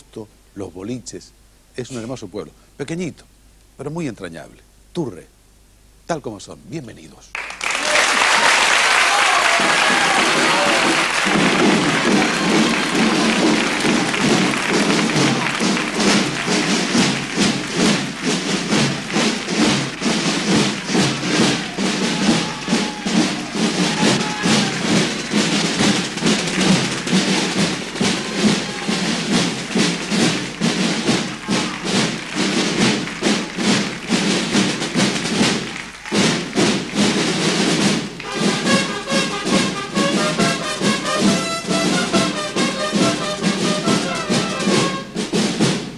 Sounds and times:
Music: 8.3 - 45.9.

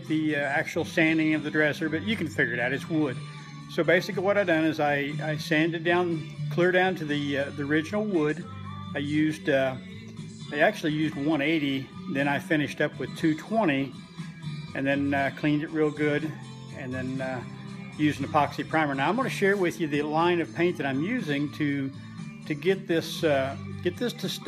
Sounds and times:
Speech: 0.0 - 8.4, 9.0 - 9.8, 10.5 - 13.9, 14.8 - 17.4, 18.0 - 24.4
Music: 0.0 - 24.4.

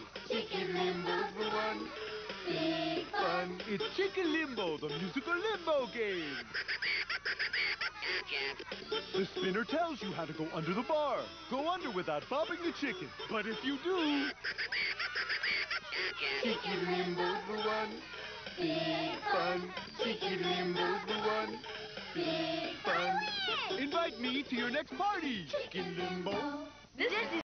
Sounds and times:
Music: 0.0 - 27.4
Speech: 22.9 - 26.2.

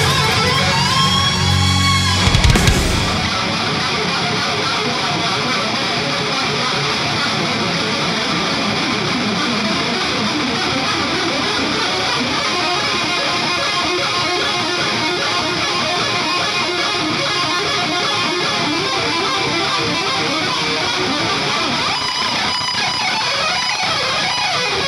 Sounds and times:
Electric guitar: 0.0 - 24.8.

